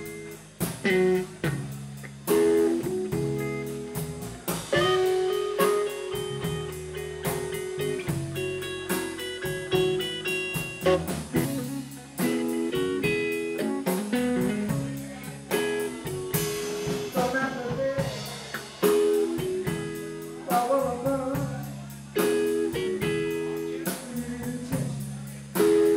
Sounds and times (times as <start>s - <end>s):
Strum: 0.0s - 25.9s.